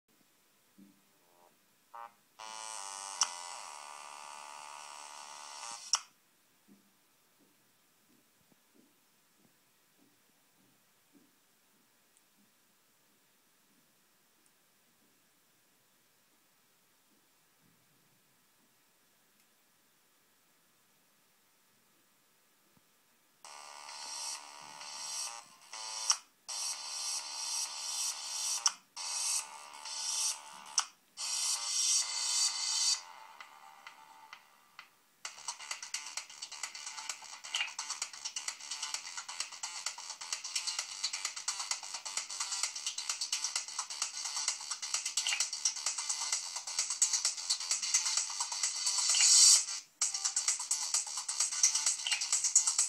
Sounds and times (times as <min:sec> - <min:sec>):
Mains hum: 0:00.1 - 0:52.8.